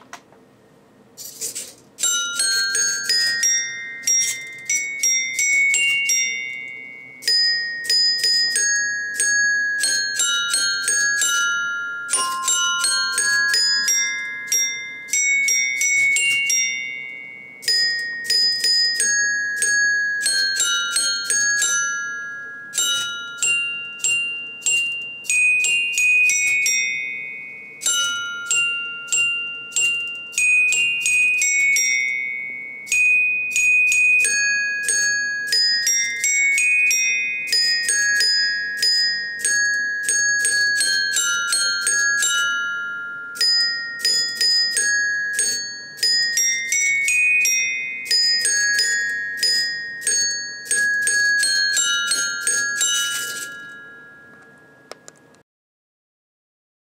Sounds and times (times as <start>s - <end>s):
Marimba, xylophone: 2.0s - 55.1s.